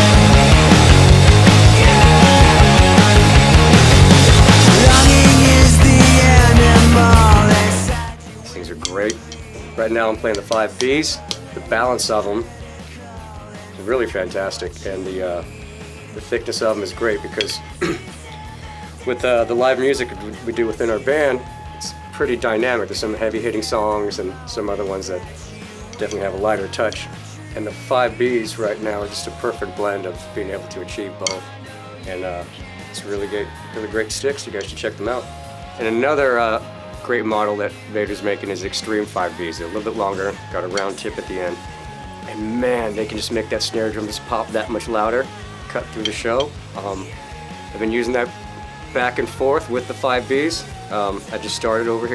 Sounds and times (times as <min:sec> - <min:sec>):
Music: 0:00.0 - 0:52.1
Speech: 0:08.4 - 0:12.5, 0:13.8 - 0:15.5, 0:16.2 - 0:17.6, 0:19.0 - 0:25.3, 0:26.0 - 0:41.6, 0:42.3 - 0:47.2, 0:47.8 - 0:48.3, 0:48.9 - 0:52.1.